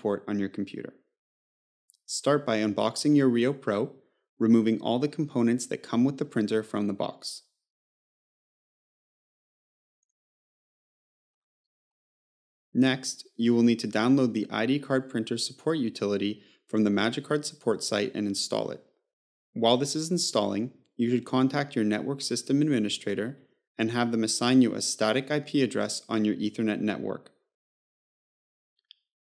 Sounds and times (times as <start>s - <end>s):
Speech: 0.0s - 1.0s, 1.9s - 7.5s, 12.8s - 18.9s, 19.6s - 27.4s.